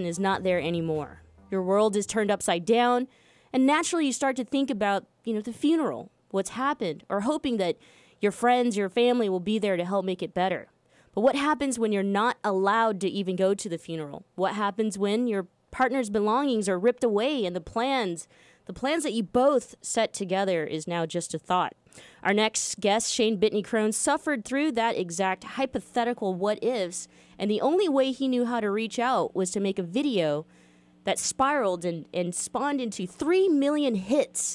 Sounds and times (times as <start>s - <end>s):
Speech: 0.0s - 30.5s, 31.1s - 34.5s.